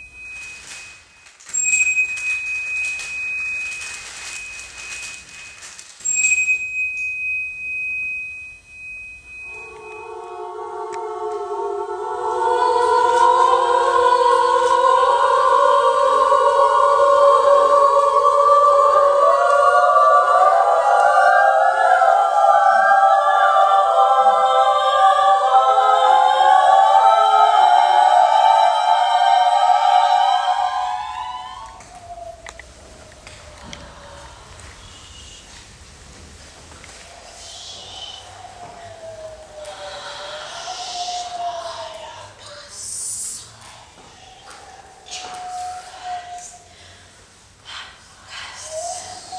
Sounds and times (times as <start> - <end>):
Music: 9.3 - 14.1.